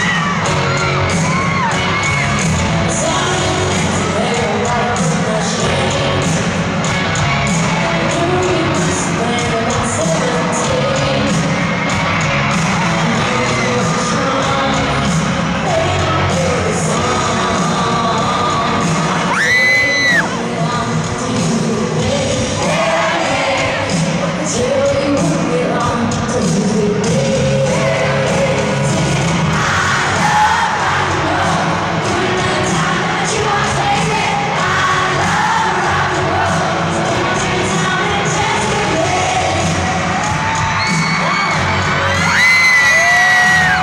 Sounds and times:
Rock and roll: 0:00.0 - 0:43.8.

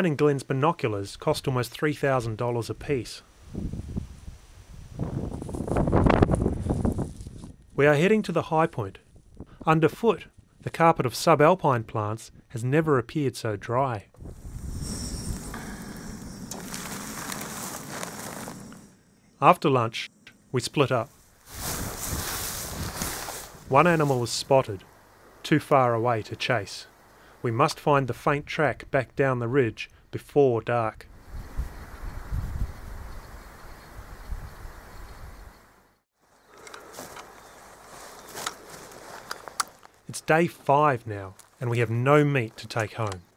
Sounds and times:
Speech: 0:00.0 - 0:03.2, 0:07.8 - 0:09.0, 0:09.6 - 0:14.1, 0:19.4 - 0:21.1, 0:23.7 - 0:24.8, 0:25.4 - 0:31.1, 0:40.1 - 0:43.3.

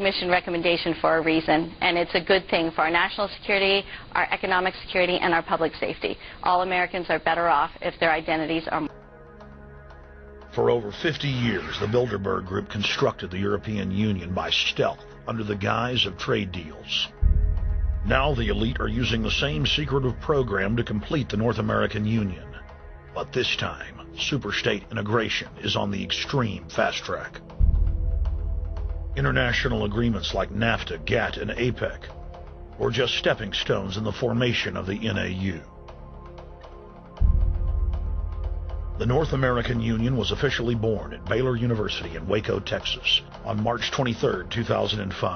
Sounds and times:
Speech: 0:00.0 - 0:08.9, 0:10.6 - 0:17.2, 0:18.1 - 0:22.6, 0:23.2 - 0:27.4, 0:29.2 - 0:32.1, 0:32.8 - 0:35.7, 0:39.0 - 0:45.3
Music: 0:08.2 - 0:45.3.

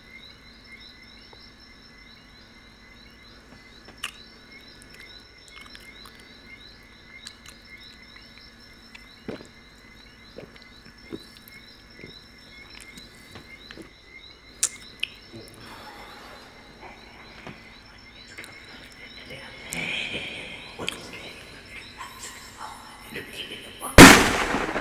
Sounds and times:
Chirp, tweet: 0:00.0 - 0:24.0.

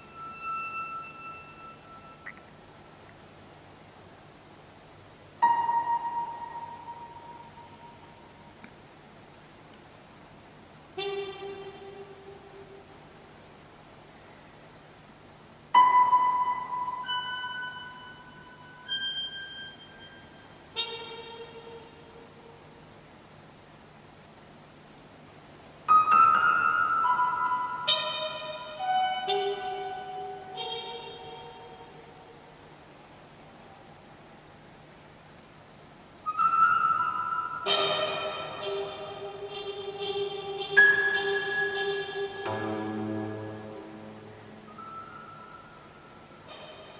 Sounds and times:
Music: 0:00.0 - 0:02.6, 0:05.4 - 0:08.7, 0:10.9 - 0:13.4, 0:15.7 - 0:22.7, 0:25.8 - 0:32.6, 0:36.2 - 0:47.0.

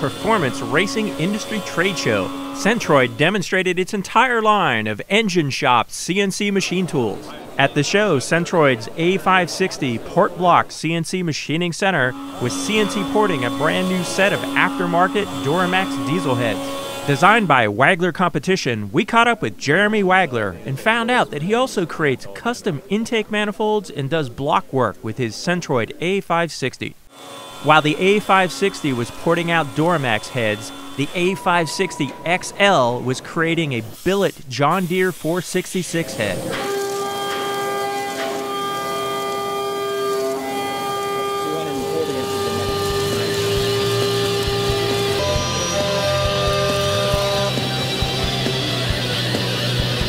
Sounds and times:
Speech: 0:00.0 - 0:27.0, 0:27.7 - 0:36.6, 0:41.4 - 0:43.5.

